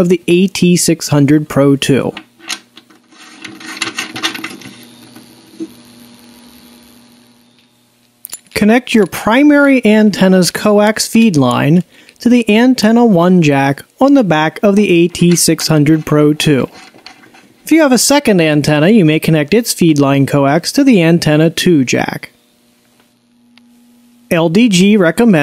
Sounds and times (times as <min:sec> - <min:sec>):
Speech: 0:00.0 - 0:02.2, 0:08.6 - 0:16.7, 0:17.7 - 0:22.4, 0:24.3 - 0:25.4.